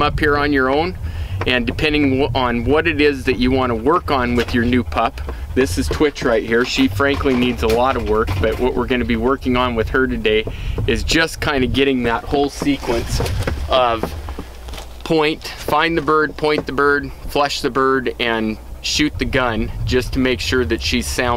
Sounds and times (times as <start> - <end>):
Speech: 0.0 - 14.1, 15.0 - 21.3.